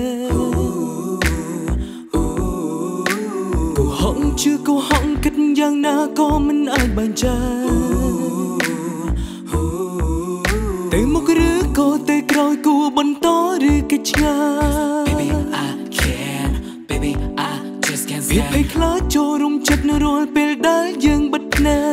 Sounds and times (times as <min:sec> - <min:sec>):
Music: 0:00.0 - 0:21.9.